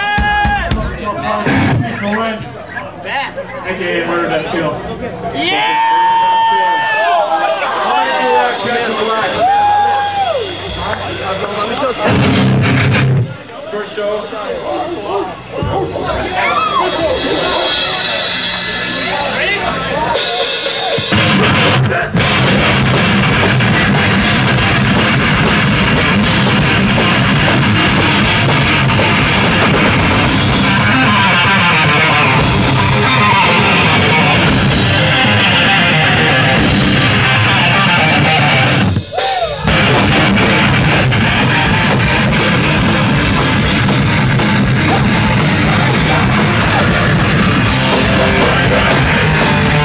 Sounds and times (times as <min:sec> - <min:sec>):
Drum kit: 0:00.0 - 0:02.0, 0:08.5 - 0:13.5, 0:15.5 - 0:49.8
Punk rock: 0:00.0 - 0:02.5, 0:08.4 - 0:13.4, 0:15.6 - 0:49.8
Heavy metal: 0:00.0 - 0:03.4, 0:07.7 - 0:49.8.